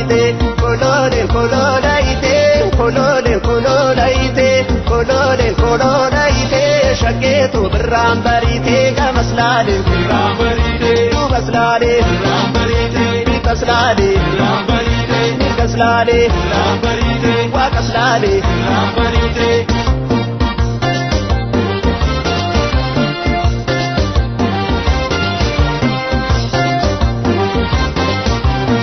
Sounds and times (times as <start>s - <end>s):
Folk music: 0.0s - 28.8s.